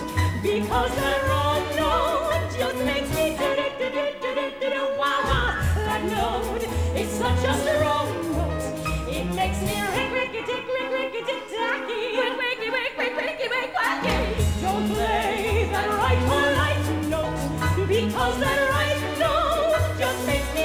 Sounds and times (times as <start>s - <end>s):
Choir: 0.0s - 20.6s
Orchestra: 0.0s - 20.6s.